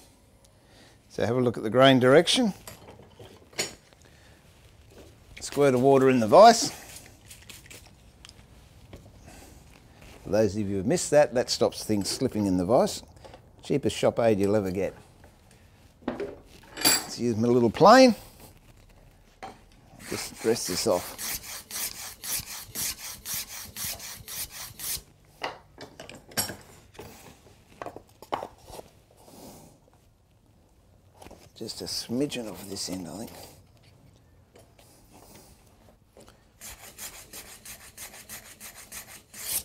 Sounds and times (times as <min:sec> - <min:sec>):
Rub: 0:05.6 - 0:08.9, 0:20.0 - 0:25.1, 0:36.6 - 0:39.6
Filing (rasp): 0:20.0 - 0:25.0, 0:36.6 - 0:39.6.